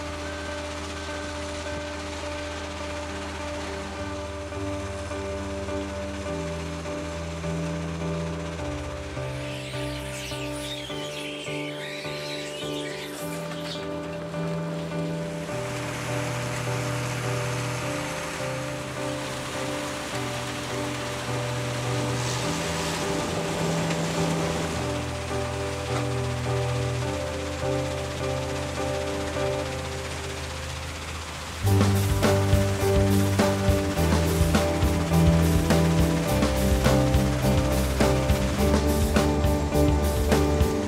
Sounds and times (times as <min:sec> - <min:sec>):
Music: 0:00.0 - 0:40.8
Vehicle: 0:00.0 - 0:40.8.